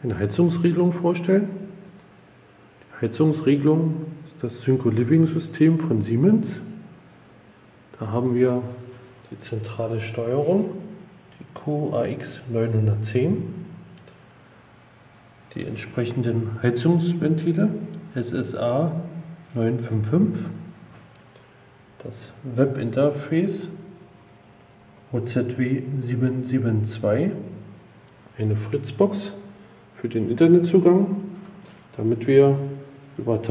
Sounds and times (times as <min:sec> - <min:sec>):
Speech: 0:00.0 - 0:01.8, 0:02.8 - 0:06.9, 0:07.9 - 0:13.8, 0:15.5 - 0:20.7, 0:22.0 - 0:24.0, 0:25.1 - 0:27.7, 0:28.3 - 0:33.5.